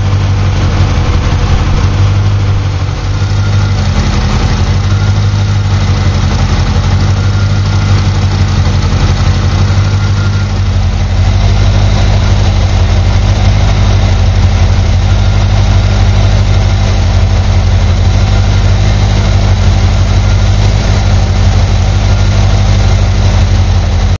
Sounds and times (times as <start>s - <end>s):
Car: 0.0s - 24.1s
Idling: 0.0s - 24.1s.